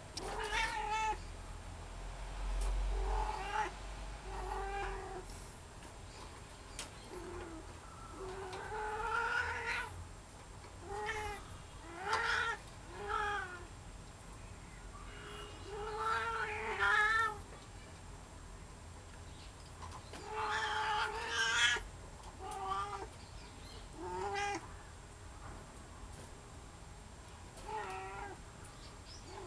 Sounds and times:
Caterwaul: 0:00.2 - 0:01.2, 0:02.9 - 0:05.2, 0:07.2 - 0:10.0, 0:10.8 - 0:13.7, 0:15.7 - 0:17.4, 0:20.2 - 0:21.8, 0:22.4 - 0:23.1, 0:24.0 - 0:24.6, 0:27.6 - 0:28.4
Meow: 0:00.2 - 0:01.2, 0:03.0 - 0:03.7, 0:04.3 - 0:05.2, 0:07.2 - 0:10.0, 0:10.8 - 0:13.7, 0:15.7 - 0:17.4, 0:20.2 - 0:21.8, 0:22.4 - 0:23.1, 0:24.0 - 0:24.7, 0:27.6 - 0:28.4.

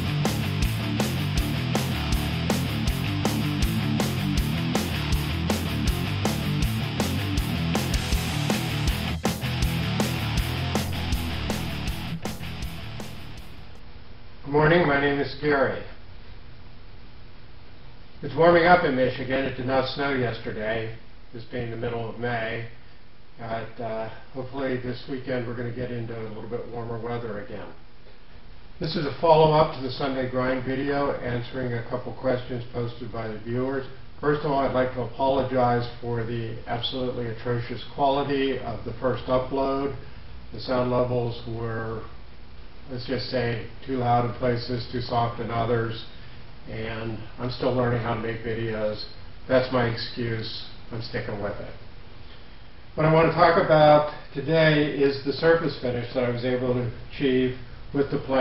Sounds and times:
Speech: 0:14.4 - 0:16.0, 0:18.2 - 0:22.8, 0:23.4 - 0:27.8, 0:28.8 - 0:42.2, 0:42.9 - 0:51.9, 0:53.0 - 0:58.4.

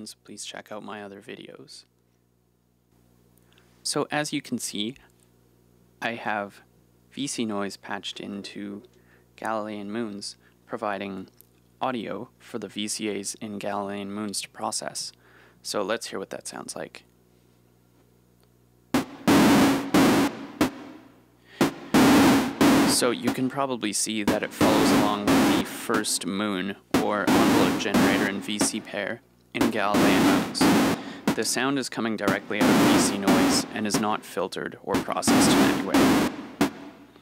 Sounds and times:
Speech: 0:00.0 - 0:01.9, 0:03.8 - 0:05.1, 0:06.0 - 0:17.1, 0:22.9 - 0:30.7, 0:31.3 - 0:36.1.

